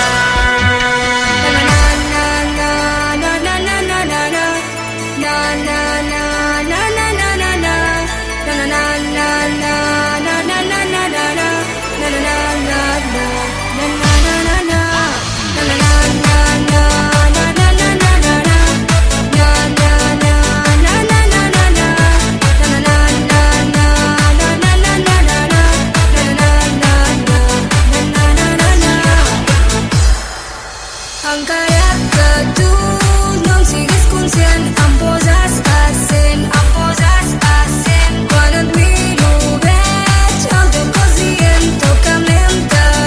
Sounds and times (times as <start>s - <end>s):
Techno: 0.0s - 43.0s.